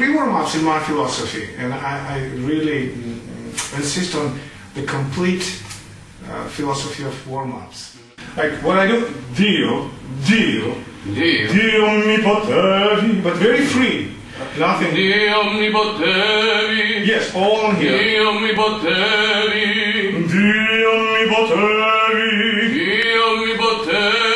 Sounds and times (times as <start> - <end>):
Speech: 0.0 - 15.9, 17.0 - 18.4
Singing: 14.8 - 24.3.